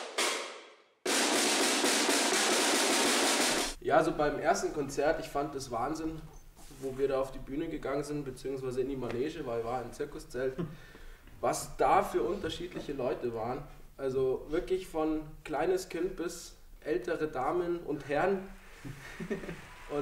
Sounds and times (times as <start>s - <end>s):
Percussion: 0.0s - 3.8s
Speech: 3.8s - 10.6s, 11.4s - 18.5s.